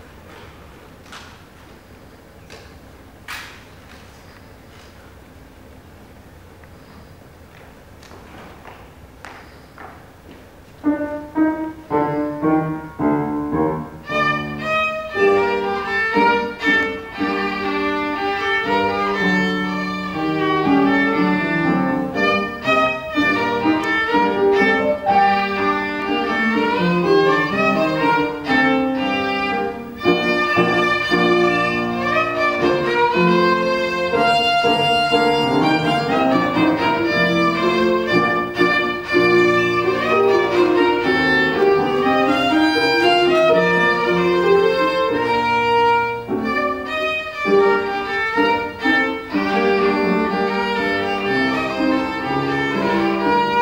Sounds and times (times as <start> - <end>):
Violin, fiddle: 13.8 - 53.6.